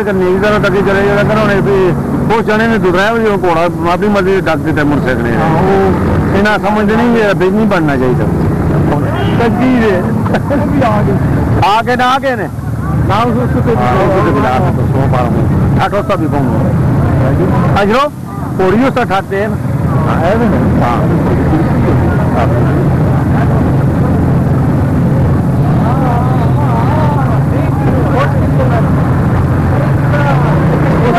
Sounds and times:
Speech: 0.0 - 8.3, 8.9 - 23.8, 25.6 - 29.0.

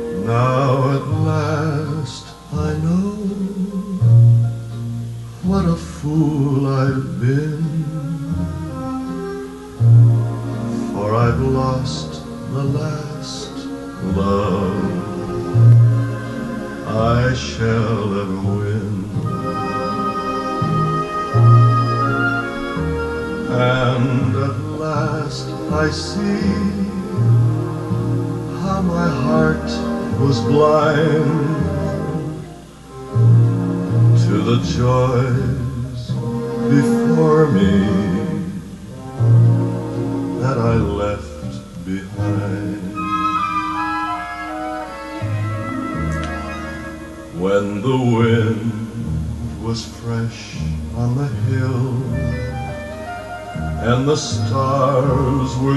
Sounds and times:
Music: 0.0 - 55.7
Male singing: 0.2 - 4.3, 5.4 - 8.4, 10.8 - 15.6, 16.8 - 20.3, 23.4 - 27.4, 28.5 - 32.4, 34.2 - 38.7, 40.4 - 43.1, 47.4 - 49.0, 49.6 - 52.5, 53.8 - 55.7.

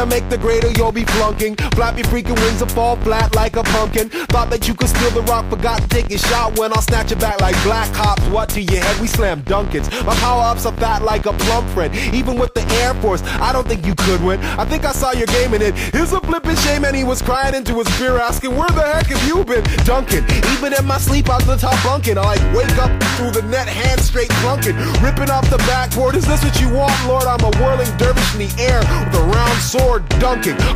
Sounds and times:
Music: 0.0 - 30.7.

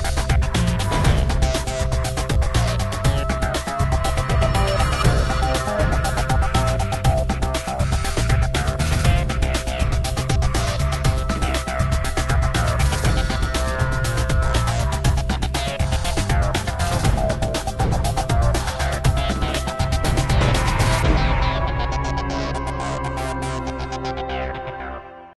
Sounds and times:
Music: 0.0 - 25.3.

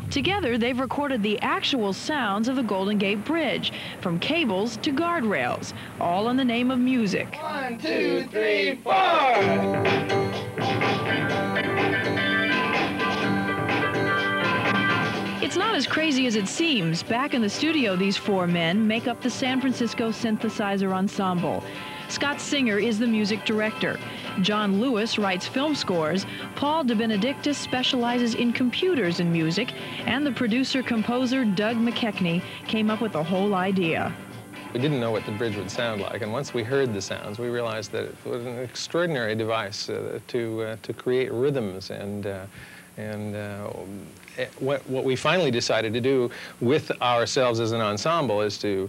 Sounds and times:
Speech: 0.1 - 9.4, 34.8 - 48.8
Music: 9.0 - 39.7.

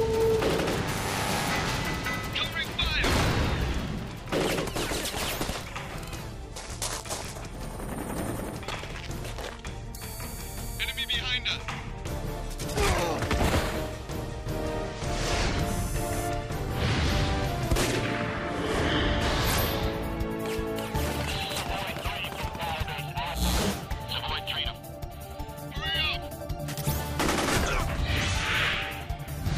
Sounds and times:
Music: 0.0 - 29.5.

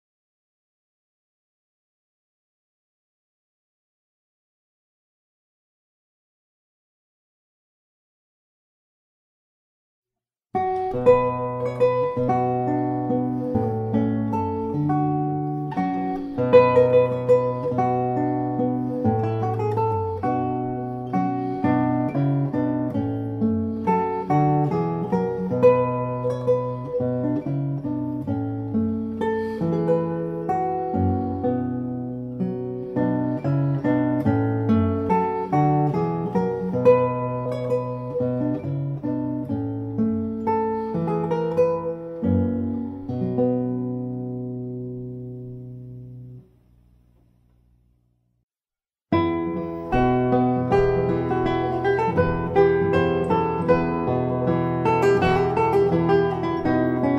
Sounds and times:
Guitar: 10.5 - 48.0, 49.1 - 57.1.

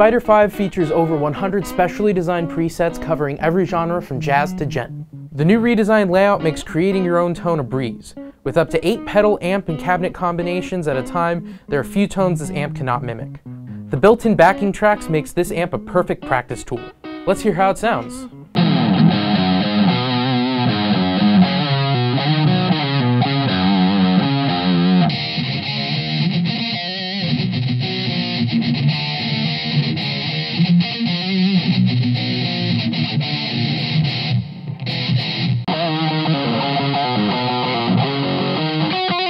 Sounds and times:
Speech: 0.0 - 18.3
Music: 0.0 - 39.3.

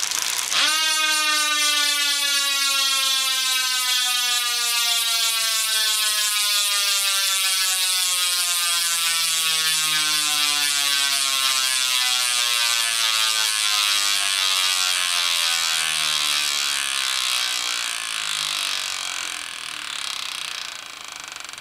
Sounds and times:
Bicycle: 0.0 - 21.6
Inside, small room: 0.0 - 21.6.

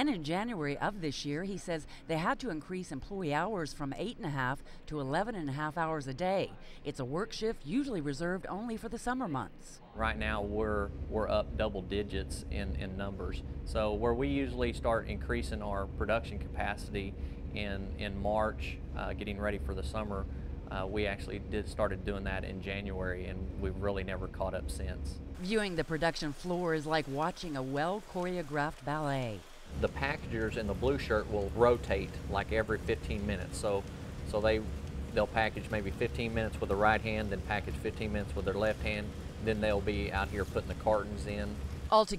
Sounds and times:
Speech: 0.0 - 42.1.

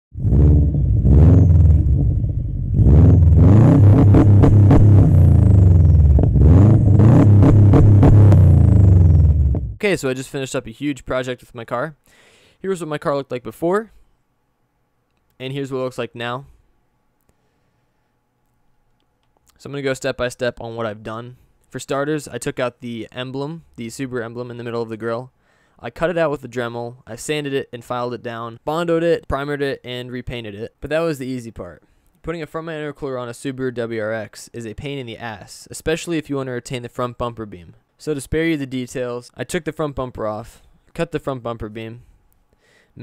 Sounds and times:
Car: 0.1 - 9.8.

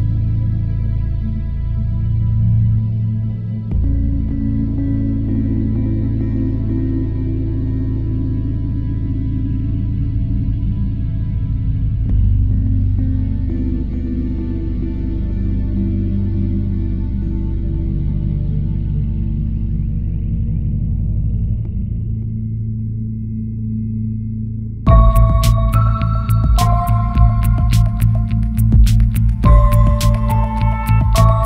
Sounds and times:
Soundtrack music: 24.9 - 31.4.

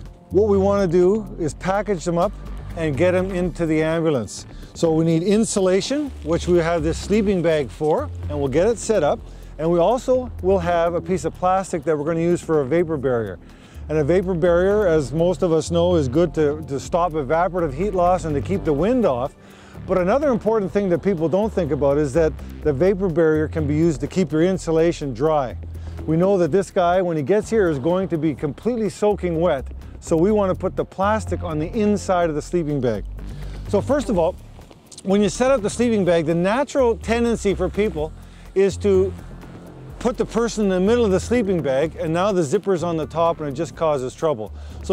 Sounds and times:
Music: 0.0 - 44.9
Speech: 0.3 - 19.3, 19.9 - 33.0, 33.7 - 34.4, 35.0 - 39.1, 40.0 - 44.9.

